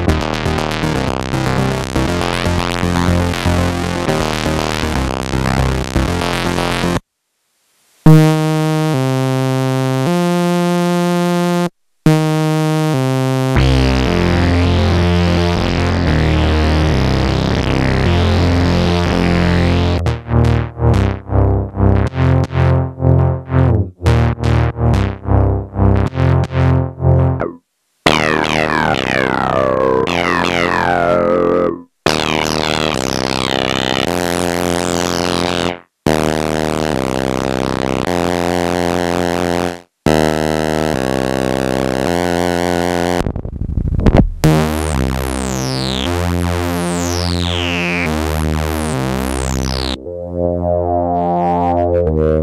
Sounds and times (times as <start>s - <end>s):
Synthesizer: 0.0s - 7.0s, 8.1s - 21.3s, 26.0s - 39.0s, 44.5s - 52.4s.